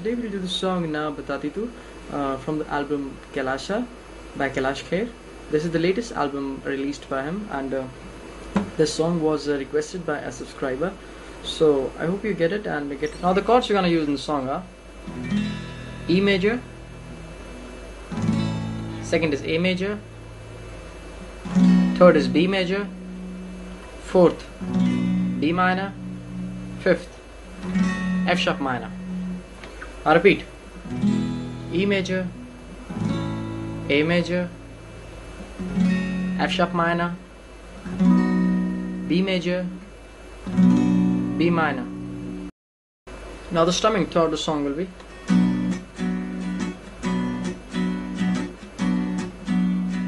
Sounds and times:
Speech: 0.0 - 8.0, 8.8 - 14.7, 16.1 - 16.6, 19.0 - 20.0, 22.0 - 22.9, 24.0 - 24.5, 25.4 - 26.0, 26.8 - 27.2, 28.3 - 29.0, 30.0 - 30.5, 31.7 - 32.4, 33.9 - 34.6, 36.4 - 37.2, 39.1 - 39.8, 41.4 - 41.9, 43.5 - 45.0
Strum: 15.0 - 37.2.

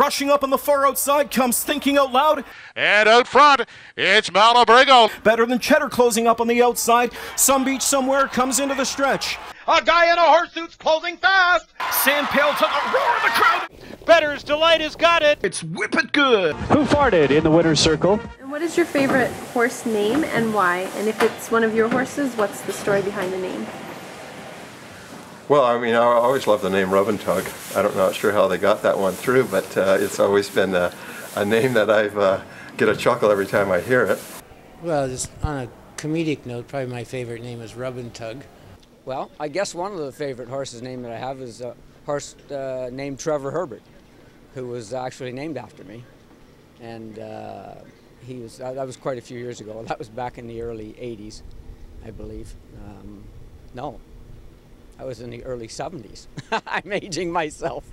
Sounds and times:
Speech: 0.0 - 23.7, 25.5 - 34.2, 34.8 - 38.5, 39.1 - 43.8, 44.6 - 46.1, 46.8 - 51.4, 52.0 - 53.2, 55.0 - 57.9.

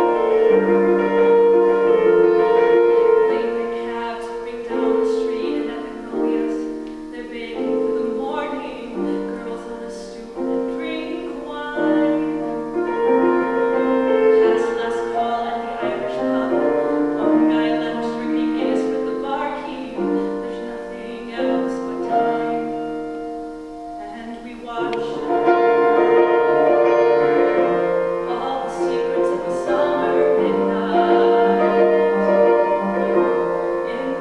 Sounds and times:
Music: 0.0 - 34.2
Female singing: 2.0 - 12.5, 13.2 - 22.9, 24.0 - 34.2.

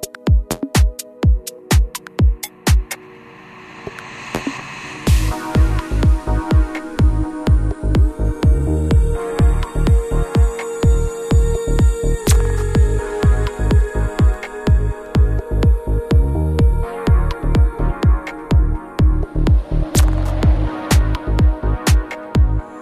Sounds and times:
Music: 0.0 - 22.8.

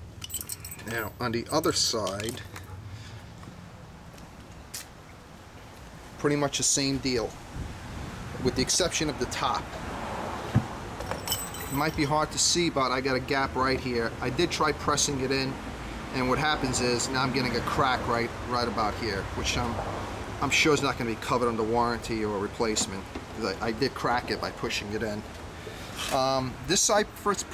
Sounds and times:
Speech: 0.8 - 2.5, 6.2 - 7.4, 8.4 - 9.7, 11.8 - 19.8, 20.4 - 25.3, 26.1 - 27.5.

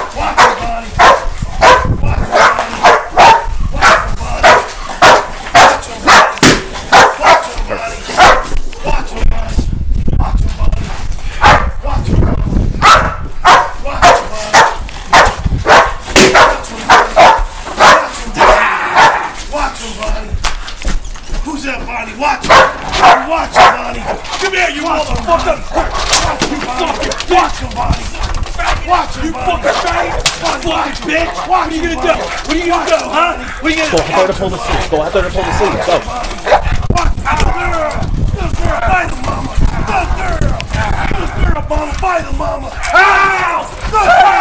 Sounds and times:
Speech: 0.0 - 1.0, 3.8 - 4.6, 5.6 - 6.2, 7.2 - 8.2, 8.8 - 10.9, 11.8 - 12.3, 13.8 - 14.7, 19.5 - 20.4, 21.4 - 44.4
Bow-wow: 0.0 - 8.6, 11.4 - 11.8, 12.8 - 19.4, 22.4 - 24.2, 25.7 - 26.4, 35.6 - 37.6.

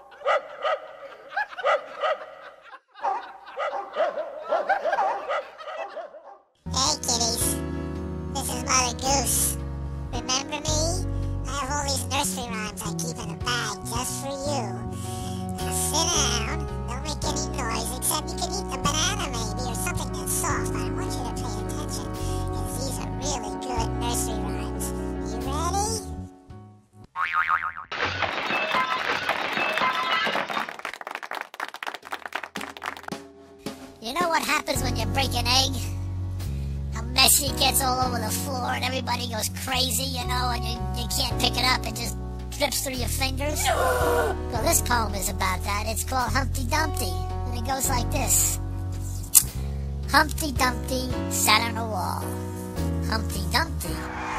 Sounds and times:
Music: 6.6 - 27.1, 32.4 - 54.3
Speech: 6.7 - 7.6, 8.4 - 9.6, 10.2 - 14.8, 15.6 - 26.1, 34.0 - 36.0, 37.0 - 43.9, 44.5 - 48.6, 50.1 - 52.3, 53.0 - 54.0.

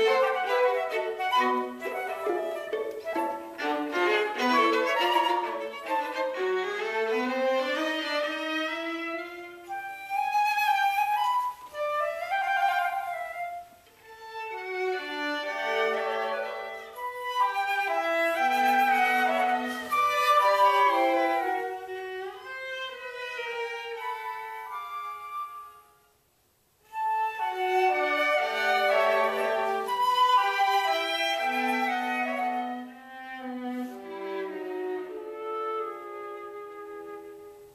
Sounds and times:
Violin, fiddle: 0.0 - 25.8, 26.9 - 37.7.

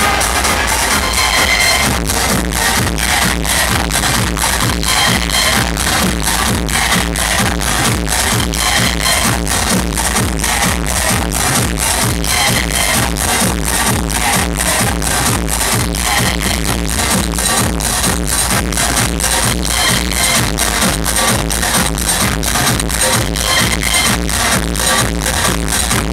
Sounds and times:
Music: 0.0 - 26.1.

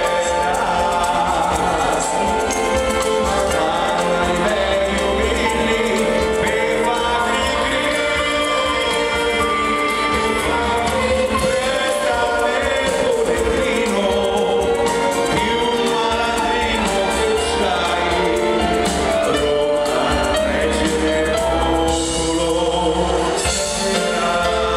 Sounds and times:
Music: 0.0 - 24.7.

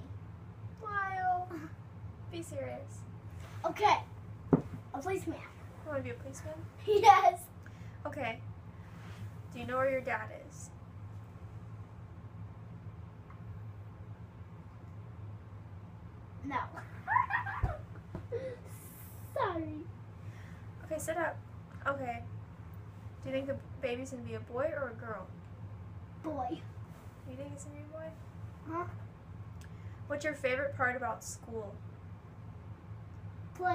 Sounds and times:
Inside, small room: 0.0 - 33.7
Child speech, kid speaking: 0.8 - 1.8, 3.6 - 4.2, 4.9 - 7.6, 16.4 - 16.8, 19.3 - 19.9, 26.2 - 26.7, 28.7 - 29.0.

